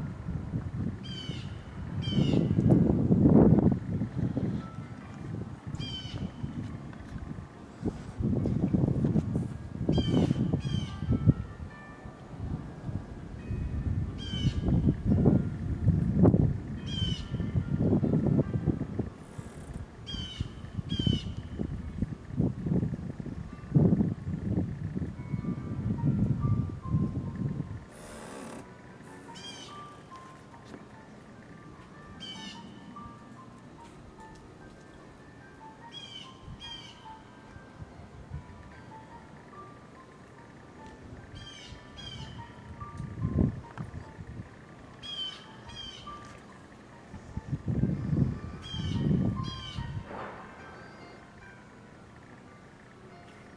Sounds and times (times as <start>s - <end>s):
Music: 0.0s - 53.5s.